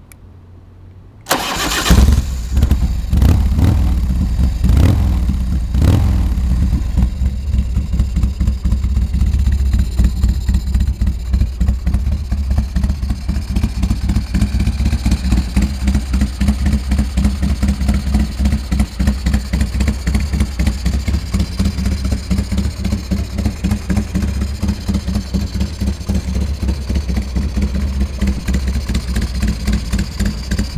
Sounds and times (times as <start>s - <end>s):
Motorcycle: 0.0s - 30.7s.